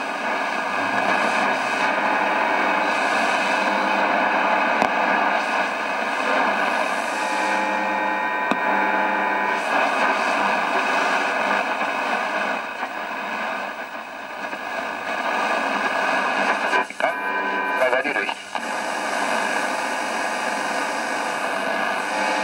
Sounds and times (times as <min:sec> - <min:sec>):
Radio: 0:00.0 - 0:22.4
Speech: 0:17.8 - 0:18.6.